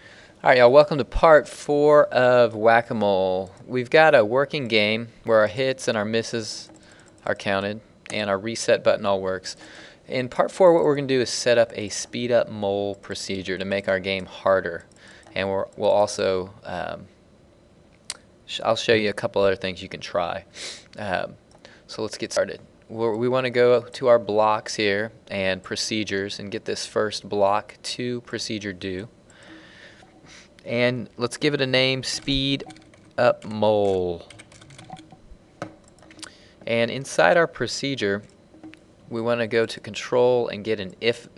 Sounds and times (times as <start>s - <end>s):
Speech: 0.4s - 17.1s, 18.5s - 29.1s, 30.6s - 34.3s, 36.7s - 38.3s, 39.1s - 41.3s.